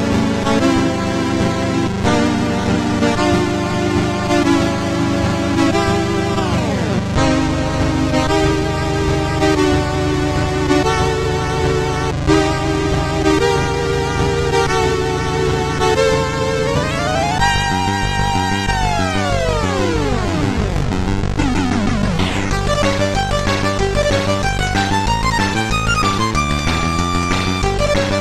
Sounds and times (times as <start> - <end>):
Video game music: 0.0 - 28.2.